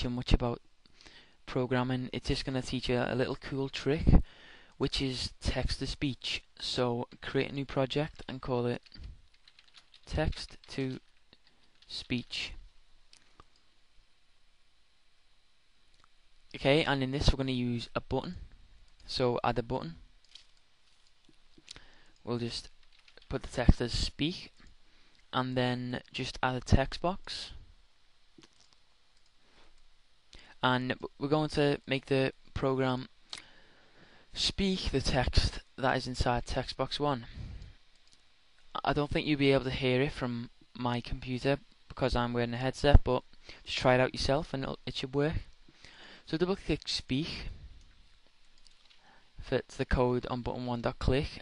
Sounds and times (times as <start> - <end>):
Speech: 0.0 - 0.6, 1.5 - 4.2, 4.8 - 9.0, 10.1 - 11.1, 11.9 - 12.6, 16.5 - 18.5, 19.1 - 20.1, 22.2 - 24.6, 25.3 - 27.6, 30.6 - 33.1, 34.4 - 37.4, 38.7 - 45.5, 46.3 - 47.6, 49.4 - 51.4.